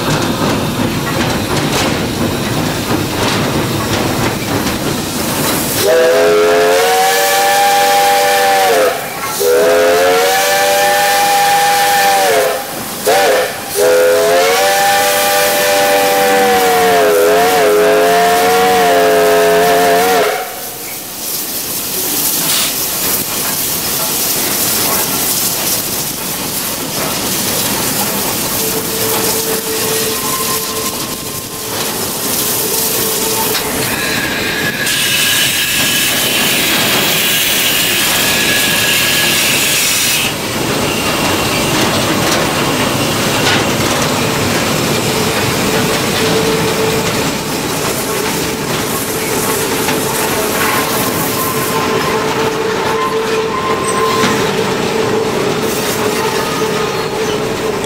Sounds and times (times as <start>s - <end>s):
Steam: 0.0s - 57.8s
Train: 0.0s - 57.8s.